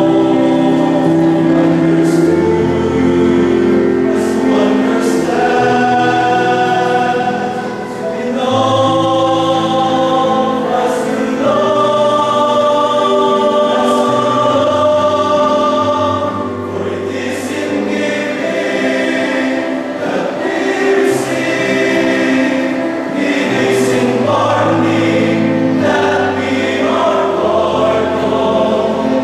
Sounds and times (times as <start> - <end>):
Choir: 0.0 - 29.2
Gospel music: 0.0 - 29.2.